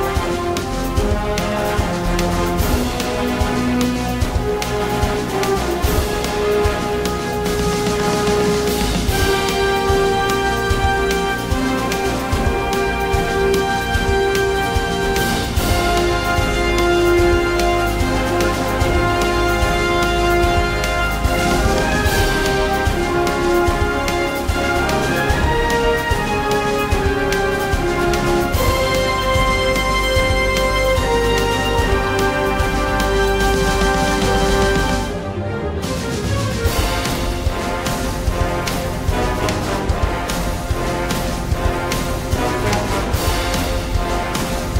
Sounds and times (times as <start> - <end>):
Independent music: 0.0 - 44.8.